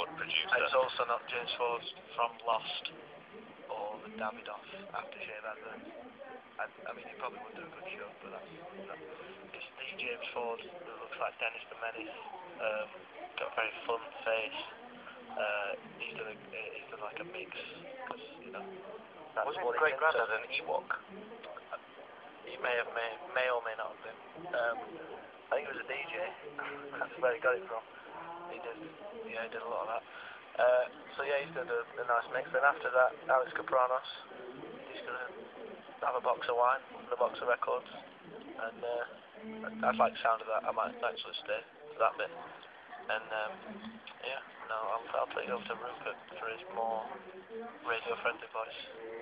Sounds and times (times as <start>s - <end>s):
Radio: 0.0s - 49.2s.